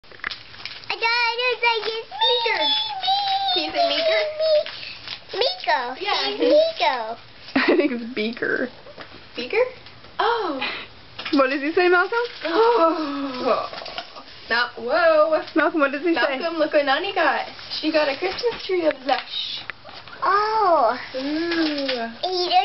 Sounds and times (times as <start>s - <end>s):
Child speech, kid speaking: 0.9s - 7.2s, 20.2s - 22.6s.